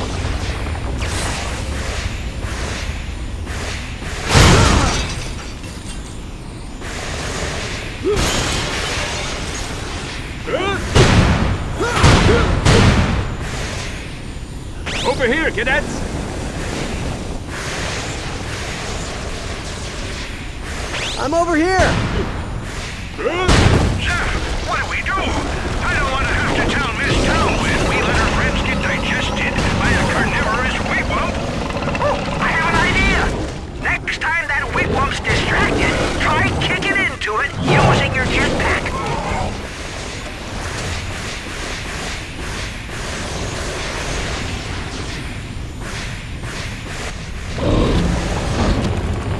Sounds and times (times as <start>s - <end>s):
Speech: 23.2s - 31.4s, 32.4s - 39.6s.